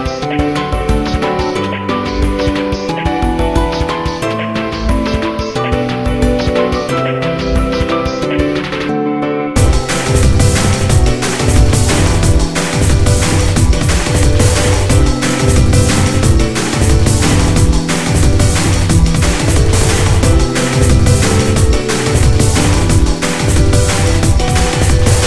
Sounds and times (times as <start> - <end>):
Music: 0.0 - 25.2.